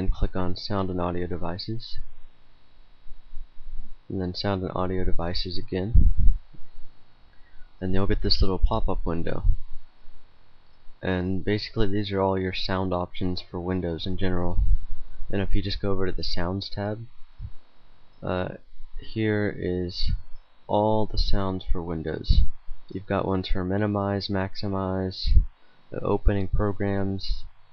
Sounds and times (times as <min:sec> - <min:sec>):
Speech: 0:00.0 - 0:02.1, 0:04.1 - 0:06.2, 0:07.8 - 0:09.6, 0:11.0 - 0:14.7, 0:15.3 - 0:17.1, 0:18.2 - 0:27.5.